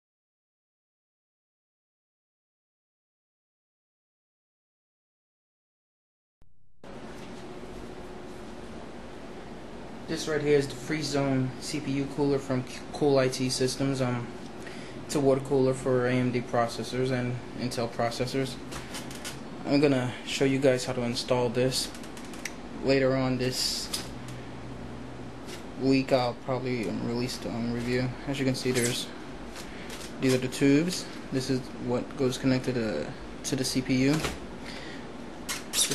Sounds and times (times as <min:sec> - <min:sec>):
Speech: 0:10.1 - 0:14.3, 0:15.1 - 0:18.6, 0:19.6 - 0:22.0, 0:22.8 - 0:24.1, 0:25.8 - 0:29.2, 0:30.2 - 0:34.4.